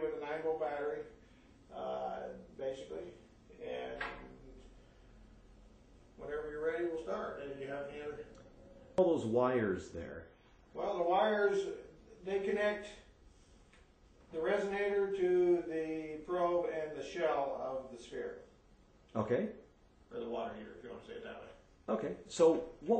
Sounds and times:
Speech: 0.0 - 4.7, 6.2 - 8.4, 9.0 - 13.2, 14.3 - 18.5, 19.1 - 22.9.

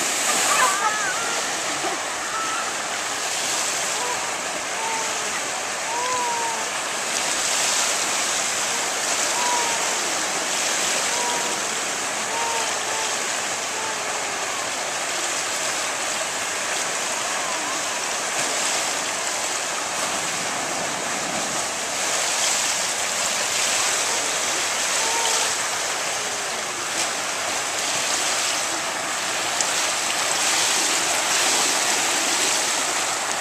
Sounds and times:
Stream: 0.0 - 33.4.

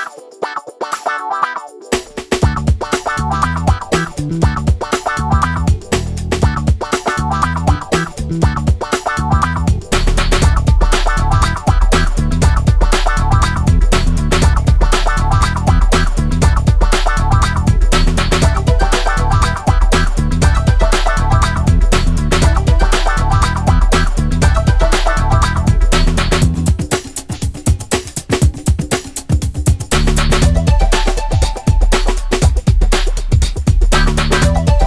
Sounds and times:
Music: 0.0 - 34.8.

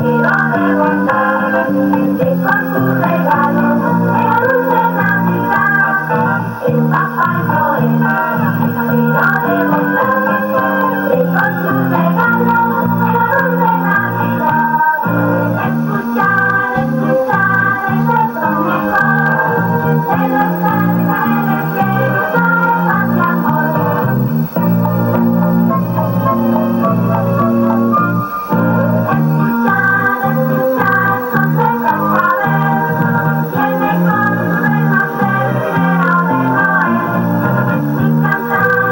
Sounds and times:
Music: 0.0 - 38.9.

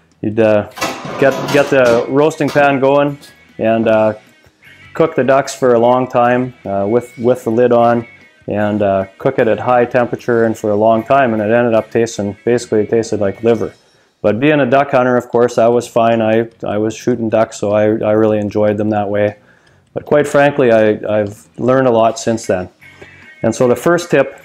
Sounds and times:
Music: 0.0 - 24.4
Speech: 0.2 - 4.2, 5.0 - 19.4, 20.0 - 22.7, 23.4 - 24.4.

